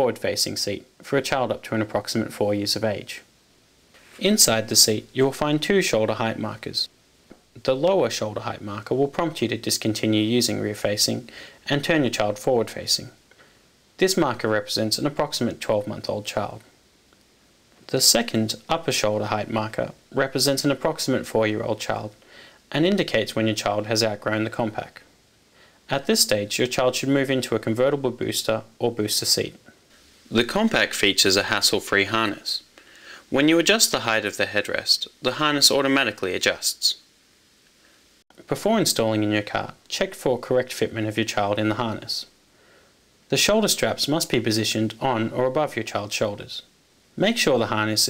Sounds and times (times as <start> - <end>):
Speech: 0.0 - 3.3, 4.2 - 6.9, 7.5 - 13.2, 14.0 - 16.7, 17.9 - 25.1, 25.9 - 29.7, 30.3 - 32.7, 33.3 - 37.1, 38.3 - 42.3, 43.3 - 48.0.